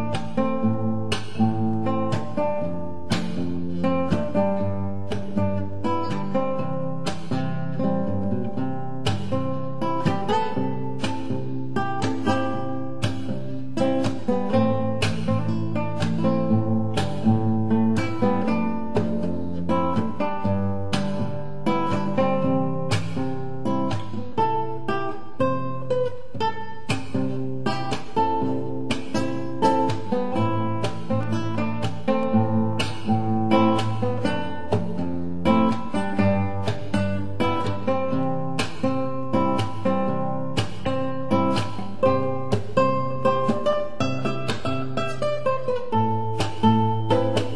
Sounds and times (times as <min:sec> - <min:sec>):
Strum: 0:00.0 - 0:47.5.